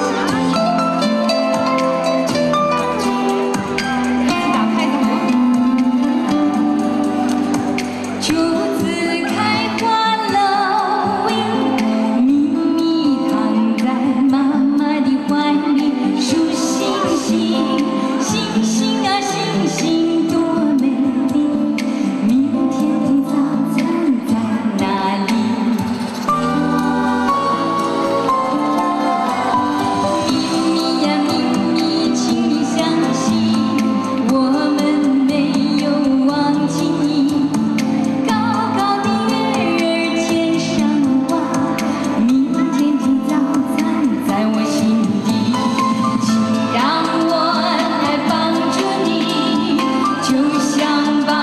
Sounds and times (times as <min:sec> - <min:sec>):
Music: 0:00.0 - 0:51.4.